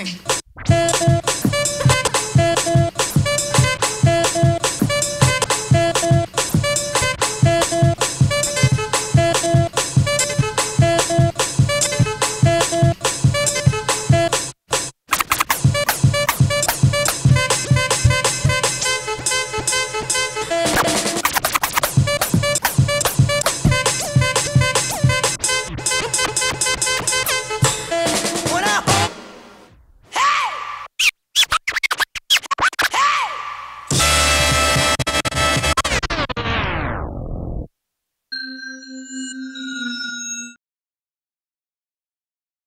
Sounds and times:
Scratching (performance technique): 0.1 - 29.1, 31.0 - 33.0.

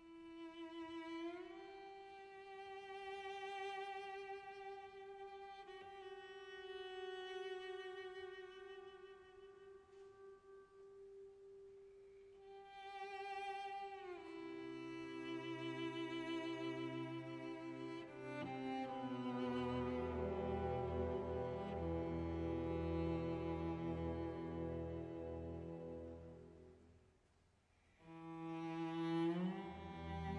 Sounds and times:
Music: 0.0 - 27.0, 28.0 - 30.3.

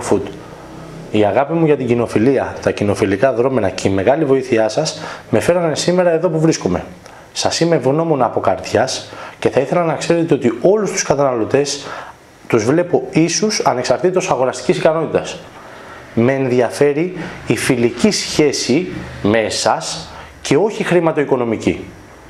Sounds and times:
Speech: 0.0 - 0.4, 1.1 - 11.9, 12.5 - 15.5, 16.2 - 22.0.

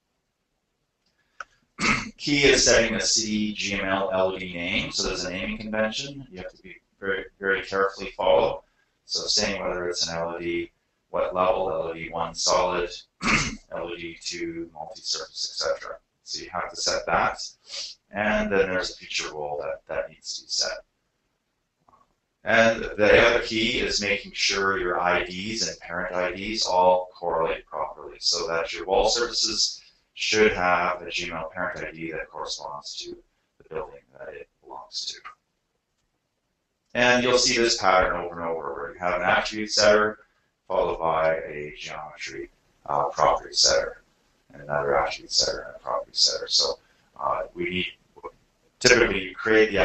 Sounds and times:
Speech: 1.8 - 20.8, 22.5 - 35.3, 37.0 - 49.8.

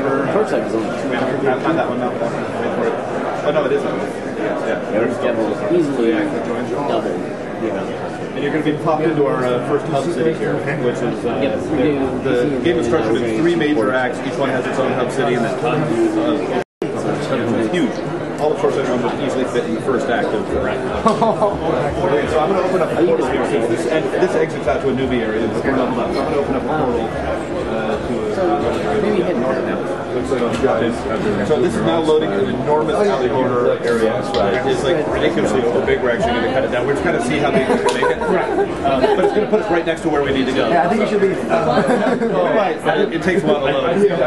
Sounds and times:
Speech: 0.0 - 44.2.

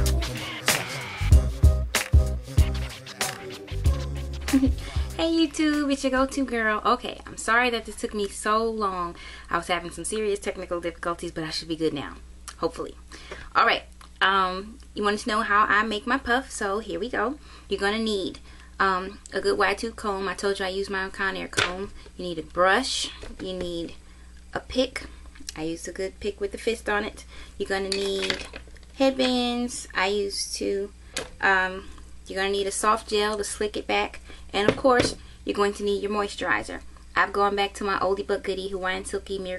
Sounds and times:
Speech: 5.2 - 13.0, 13.6 - 28.4, 29.0 - 39.5.

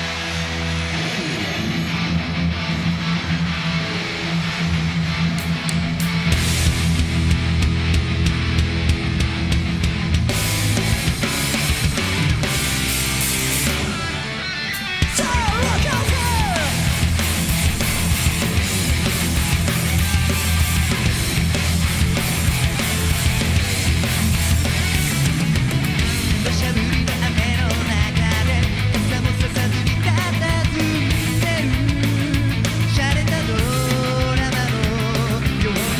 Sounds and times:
Music: 0.0 - 35.9.

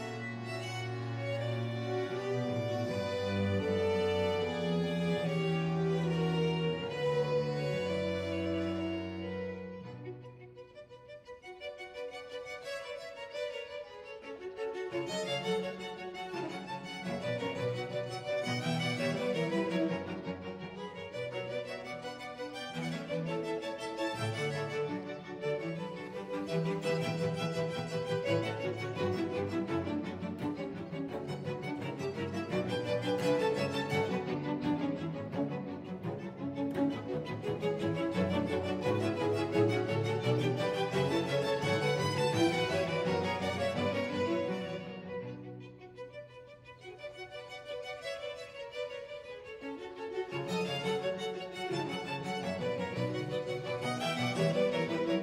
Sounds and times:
Music: 0.0 - 55.2.

